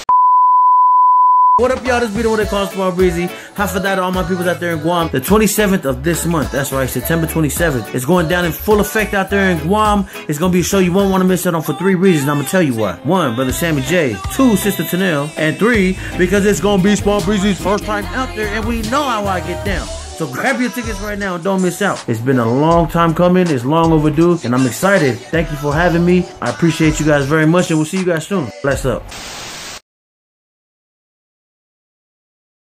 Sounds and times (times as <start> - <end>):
Speech: 1.6 - 29.1
Music: 1.6 - 29.2.